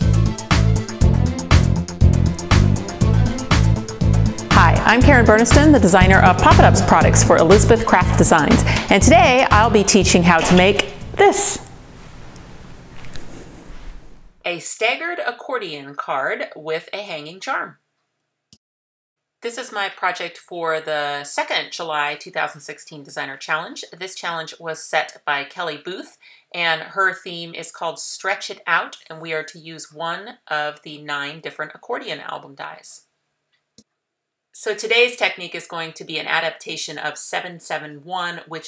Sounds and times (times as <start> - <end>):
Speech: 4.5 - 11.7, 14.5 - 17.8, 19.4 - 33.1, 34.6 - 38.6.